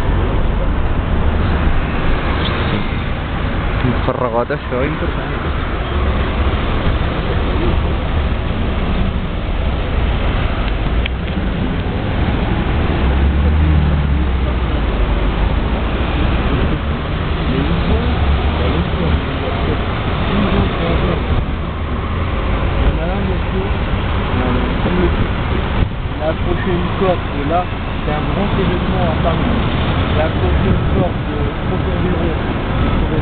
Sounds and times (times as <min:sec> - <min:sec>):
Car: 0:00.0 - 0:33.2
Speech: 0:03.8 - 0:05.5, 0:17.4 - 0:21.4, 0:22.8 - 0:25.3, 0:26.1 - 0:33.2.